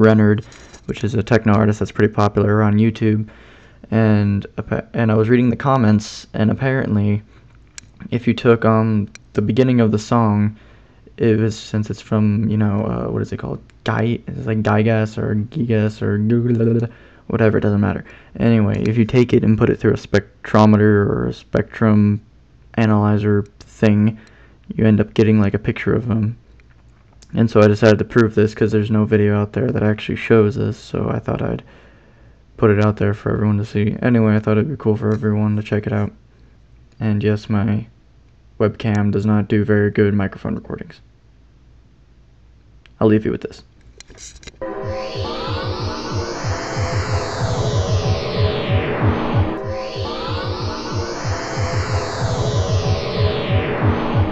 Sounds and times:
Speech: 0.0 - 3.3, 3.9 - 7.3, 8.0 - 10.6, 11.2 - 26.4, 27.3 - 31.7, 32.6 - 36.2, 37.0 - 37.9, 38.6 - 41.1, 43.0 - 43.7.

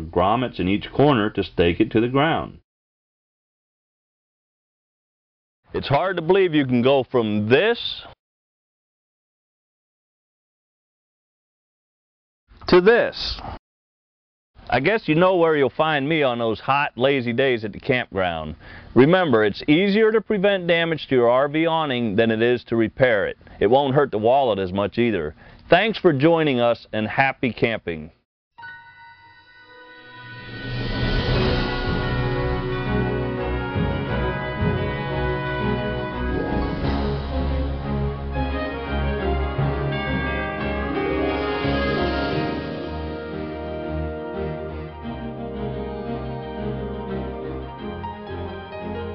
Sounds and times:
Hammond organ: 31.3 - 49.1.

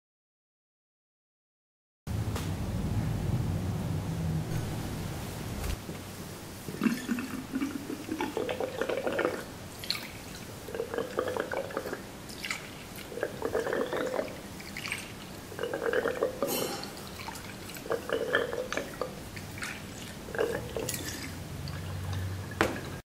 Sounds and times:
Water: 6.4 - 23.0
Liquid: 6.6 - 23.0.

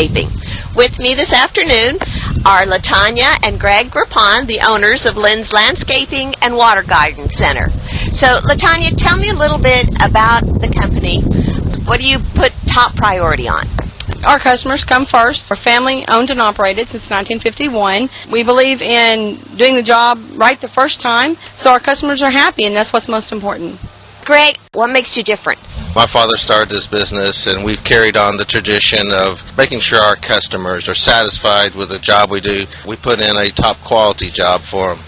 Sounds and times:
Speech: 0.0 - 11.2, 11.9 - 35.0.

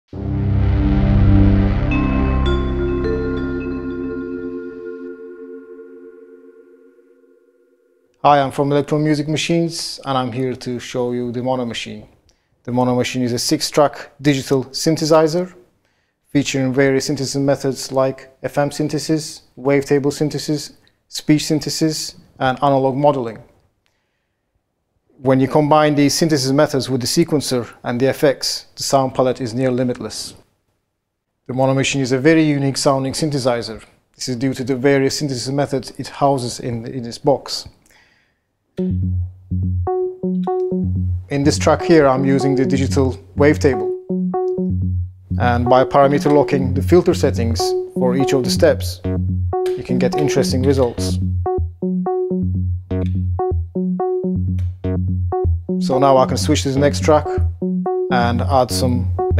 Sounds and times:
Synthesizer: 0.2 - 7.9, 38.8 - 59.3
Speech: 8.2 - 12.1, 12.7 - 15.6, 16.3 - 23.5, 25.2 - 30.4, 31.5 - 37.8, 41.3 - 43.9, 45.4 - 49.1, 49.7 - 51.2, 55.8 - 57.4, 58.1 - 59.3.

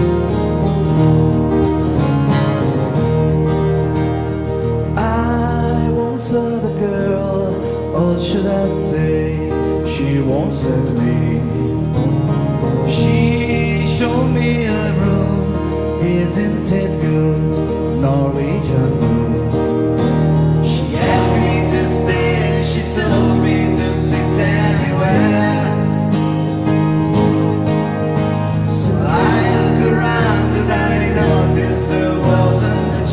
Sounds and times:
Music: 0.0 - 33.1.

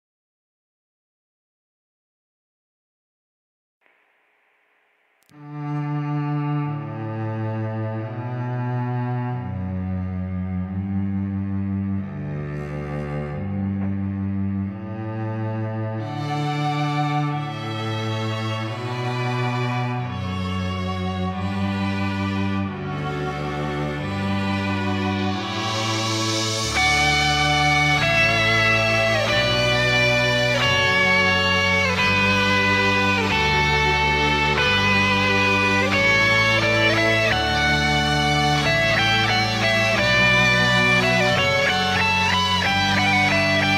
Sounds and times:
Strum: 3.8 - 43.7
Electric guitar: 21.4 - 43.7.

